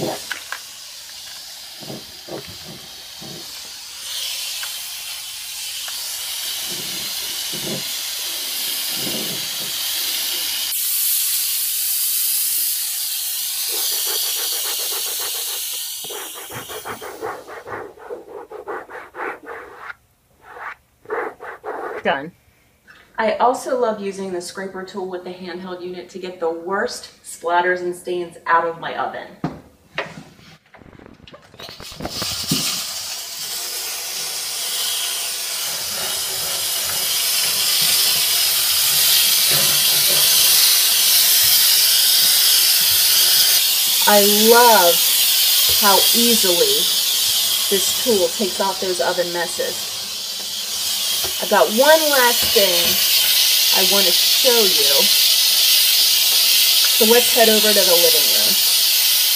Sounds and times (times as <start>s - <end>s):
Hiss: 0.0s - 22.1s, 31.6s - 59.3s.